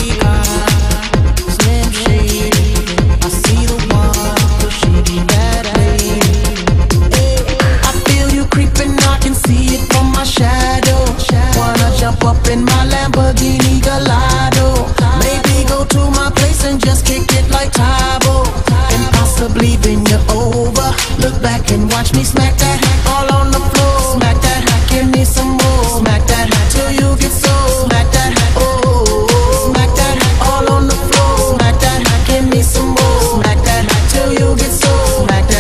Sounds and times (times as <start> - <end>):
Techno: 0.0 - 35.6.